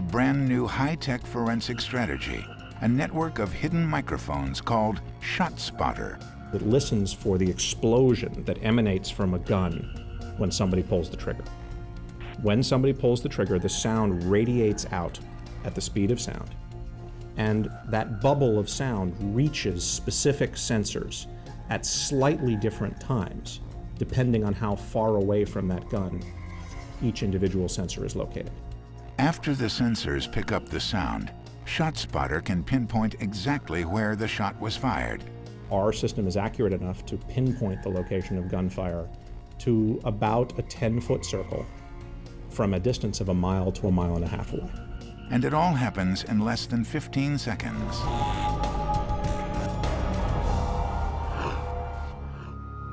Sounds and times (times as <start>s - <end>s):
Speech: 0.0s - 11.4s, 12.3s - 16.6s, 17.4s - 26.2s, 27.0s - 28.5s, 29.2s - 41.7s, 42.5s - 48.2s
Music: 0.0s - 52.9s.